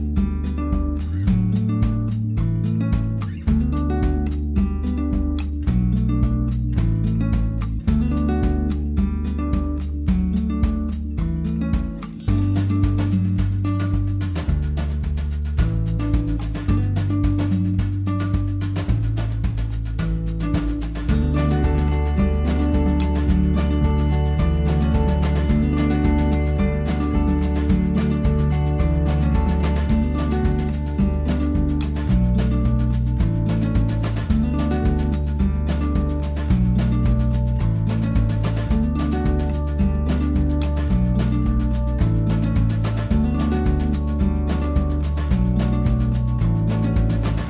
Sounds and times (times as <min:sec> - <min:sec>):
Music: 0:00.0 - 0:47.4.